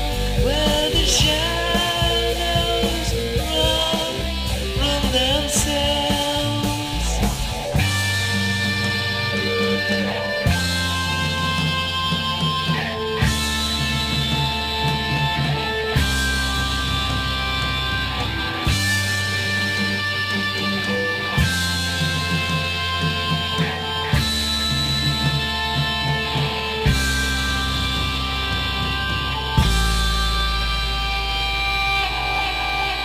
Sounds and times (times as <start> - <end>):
Music: 0.0 - 33.0
Singing: 0.4 - 7.4.